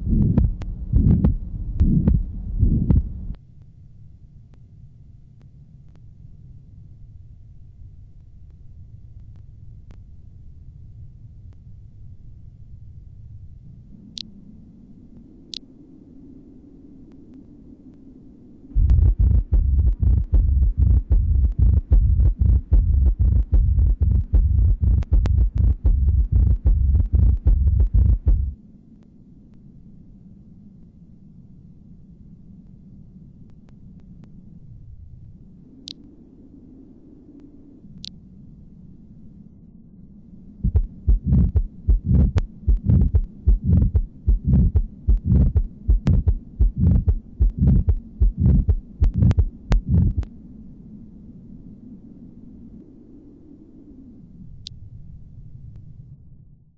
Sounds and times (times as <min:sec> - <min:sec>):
Heart murmur: 0:00.0 - 0:03.1, 0:18.8 - 0:28.6, 0:40.6 - 0:50.3.